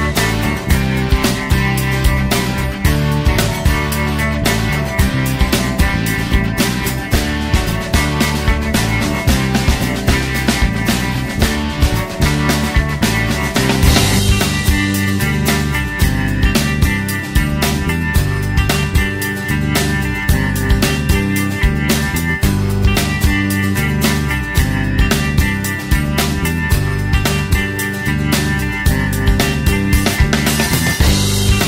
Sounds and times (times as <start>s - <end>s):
Music: 0.0s - 31.6s.